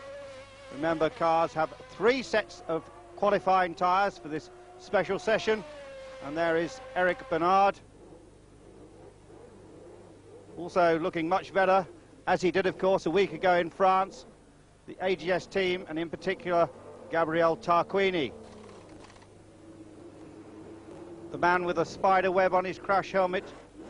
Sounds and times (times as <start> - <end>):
Speech: 0.8 - 5.6, 6.2 - 7.8, 10.6 - 14.3, 14.9 - 18.3, 21.3 - 23.6.